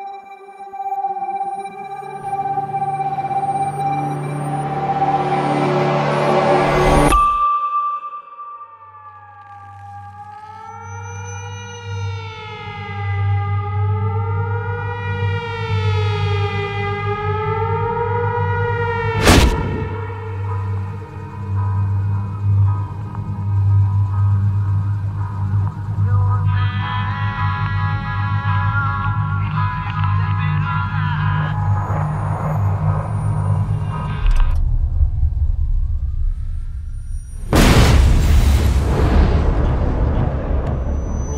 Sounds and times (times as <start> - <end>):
Music: 0.0 - 41.3.